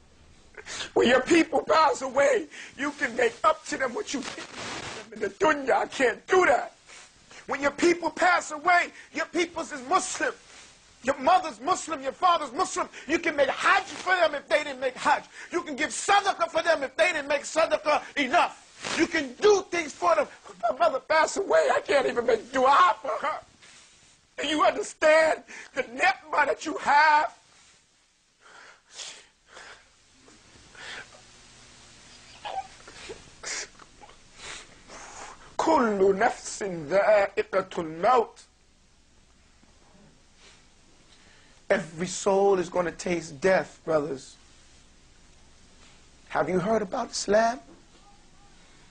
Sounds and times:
Speech: 0:01.0 - 0:06.8, 0:07.5 - 0:10.4, 0:11.0 - 0:23.5, 0:24.4 - 0:27.4, 0:35.6 - 0:38.5, 0:41.7 - 0:44.4, 0:46.3 - 0:48.1
Crying, sobbing: 0:32.1 - 0:34.2.

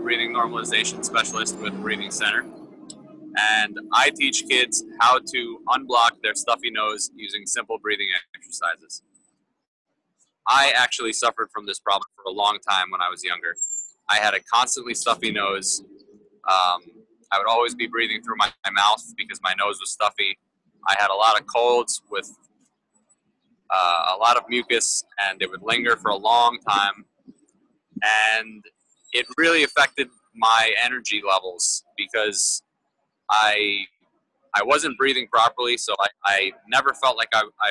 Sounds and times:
Speech: 0:00.0 - 0:09.0, 0:10.5 - 0:15.9, 0:16.5 - 0:22.3, 0:23.7 - 0:27.0, 0:28.0 - 0:32.6, 0:33.3 - 0:33.9, 0:34.6 - 0:37.7.

